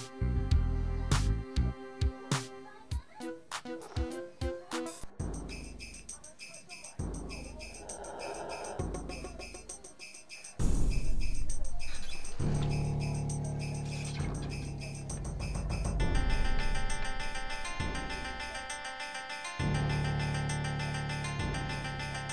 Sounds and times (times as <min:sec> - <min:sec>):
Music: 0:00.0 - 0:22.3.